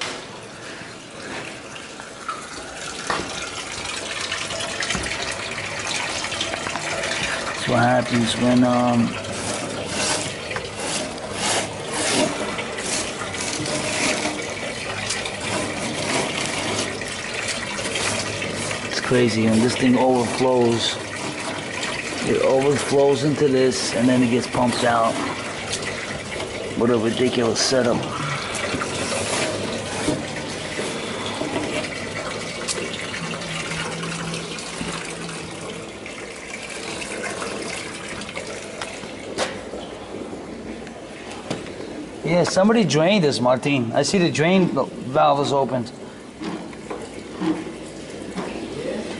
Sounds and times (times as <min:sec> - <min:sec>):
Water: 0:00.0 - 0:49.1
Water tap, faucet: 0:00.0 - 0:49.1.